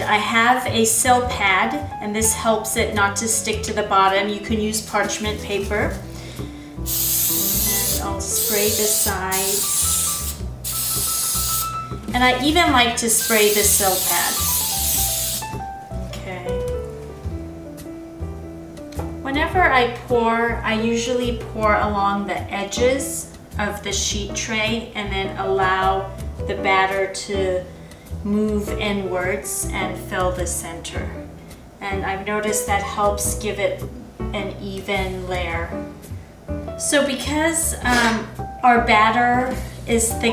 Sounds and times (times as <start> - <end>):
Speech: 0.0 - 6.0, 7.6 - 9.6, 12.1 - 14.4, 16.1 - 16.6, 19.3 - 27.6, 28.3 - 31.2, 31.8 - 35.8, 36.8 - 40.3
Music: 0.0 - 40.3.